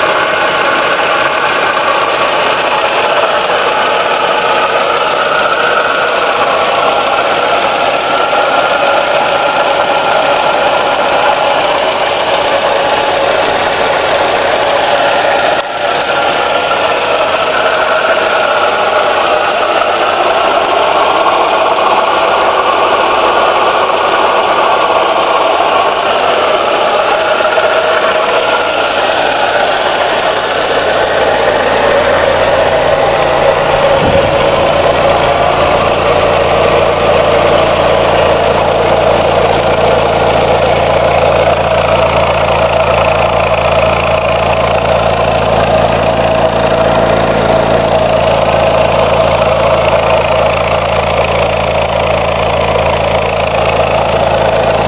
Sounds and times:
Vehicle: 0:00.0 - 0:54.8.

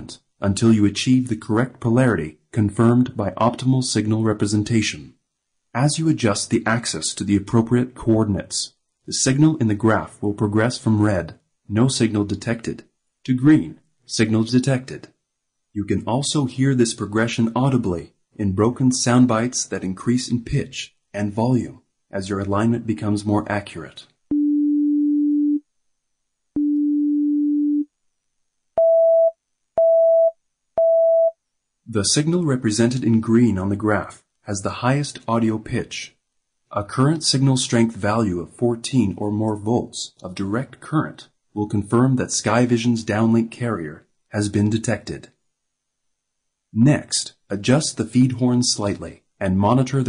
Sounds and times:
Speech: 0:00.0 - 0:15.2, 0:15.8 - 0:24.2, 0:31.9 - 0:45.4, 0:46.8 - 0:50.0
Busy signal: 0:24.3 - 0:25.6, 0:26.6 - 0:27.9, 0:28.8 - 0:31.4.

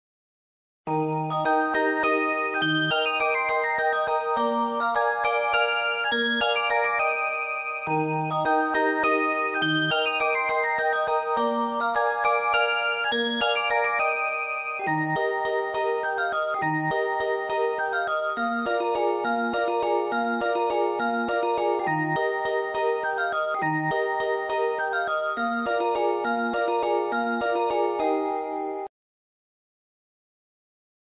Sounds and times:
Music: 0:00.9 - 0:28.9.

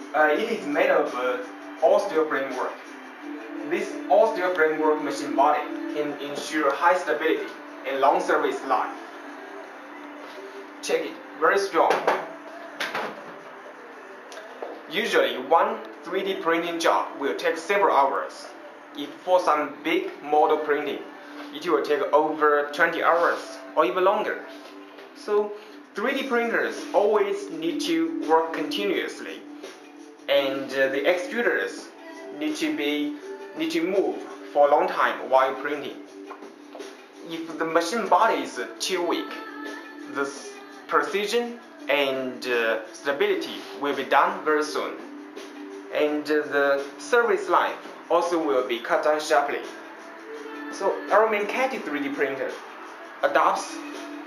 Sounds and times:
Speech: 0:00.1 - 0:02.8, 0:03.7 - 0:09.0, 0:10.8 - 0:12.3, 0:14.9 - 0:24.5, 0:25.2 - 0:29.4, 0:30.3 - 0:36.0, 0:37.2 - 0:39.5, 0:40.1 - 0:45.0, 0:45.9 - 0:49.8, 0:50.7 - 0:52.6, 0:53.2 - 0:53.9.

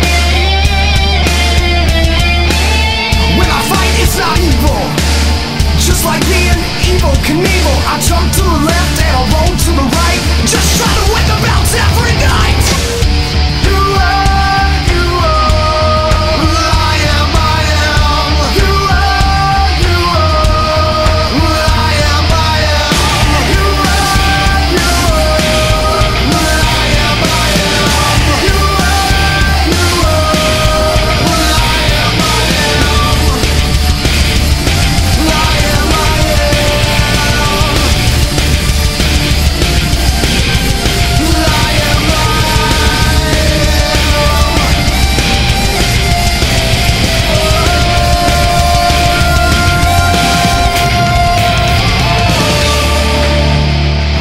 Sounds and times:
Angry music: 0:00.0 - 0:54.2.

